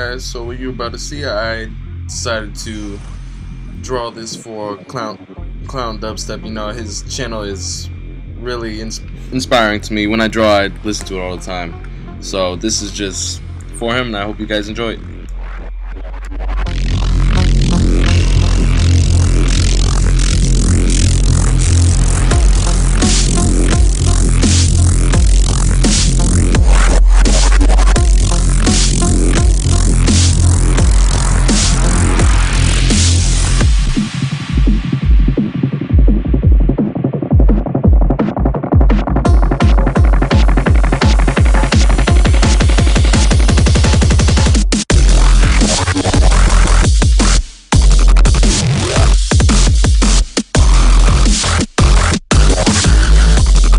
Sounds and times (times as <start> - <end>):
Dubstep: 0.0 - 53.7.